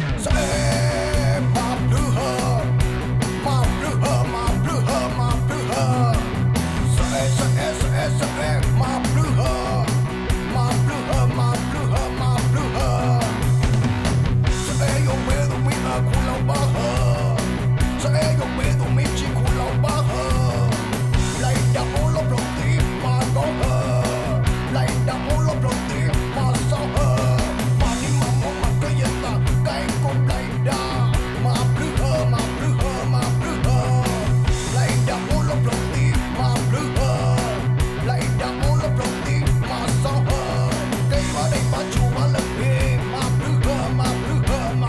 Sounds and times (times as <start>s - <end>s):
Music: 0.0s - 44.8s.